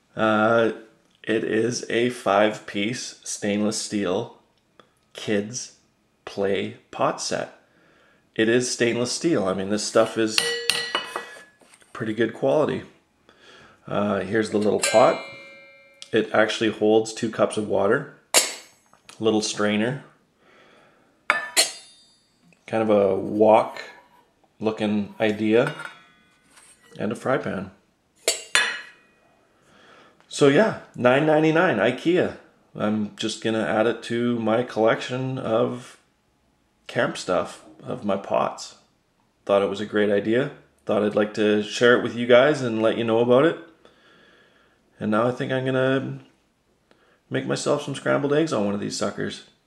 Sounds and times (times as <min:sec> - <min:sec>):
Dishes, pots, and pans: 0:10.4 - 0:11.8, 0:21.3 - 0:22.0, 0:25.6 - 0:27.0, 0:28.3 - 0:29.1.